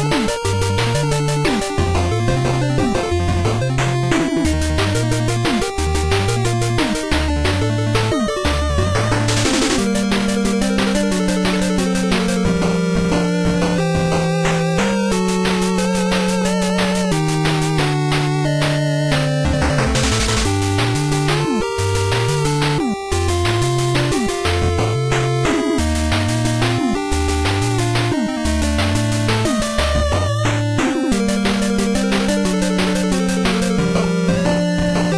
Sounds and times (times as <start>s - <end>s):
Music: 0.0s - 35.1s.